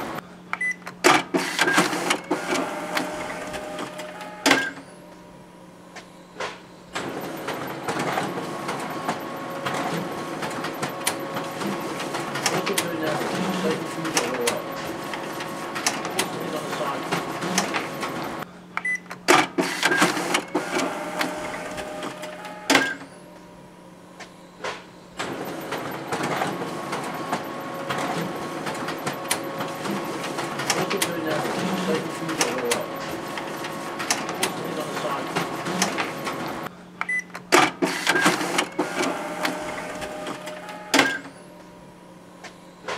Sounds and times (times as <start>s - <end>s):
Printer: 0.0s - 42.9s
Speech: 12.5s - 14.7s, 16.2s - 17.8s, 30.7s - 33.0s, 34.4s - 36.0s.